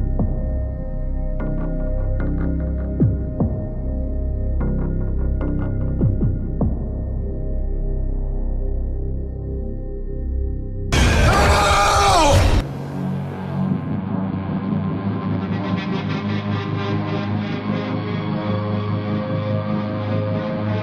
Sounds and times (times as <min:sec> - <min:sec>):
Music: 0:00.0 - 0:20.8.